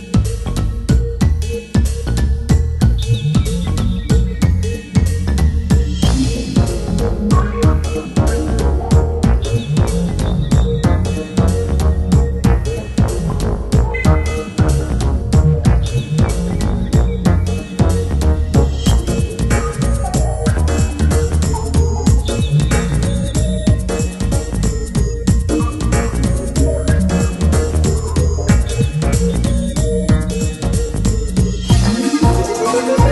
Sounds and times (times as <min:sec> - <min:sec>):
Music: 0:00.0 - 0:33.1.